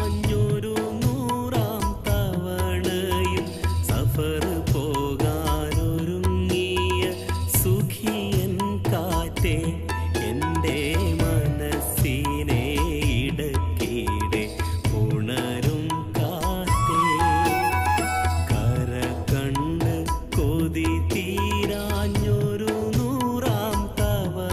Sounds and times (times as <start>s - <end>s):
Male singing: 0.0s - 24.5s
Music: 0.0s - 24.5s.